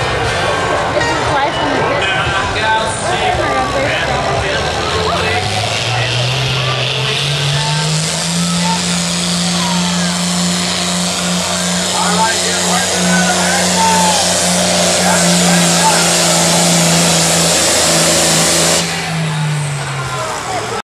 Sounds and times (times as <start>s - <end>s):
Speech: 0.3s - 10.3s, 11.7s - 14.3s, 14.9s - 16.8s, 19.3s - 20.8s.